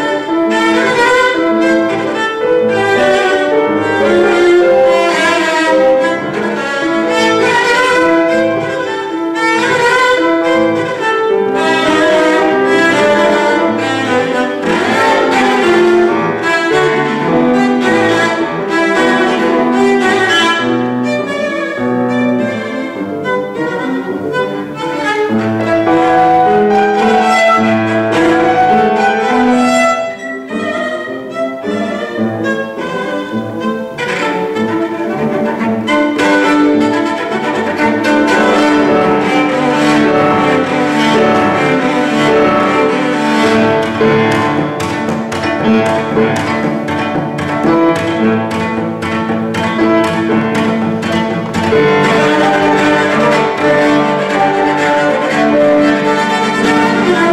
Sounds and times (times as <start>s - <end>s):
Cello: 0.0s - 57.3s.